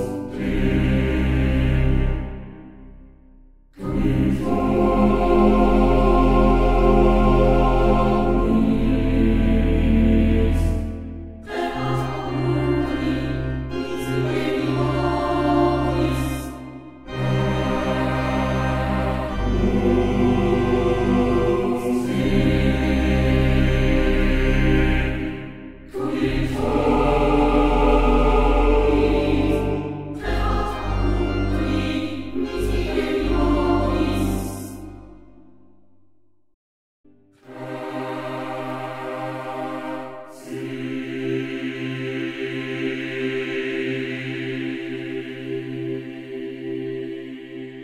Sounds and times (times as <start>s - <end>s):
Music: 0.0s - 36.5s, 37.1s - 47.8s.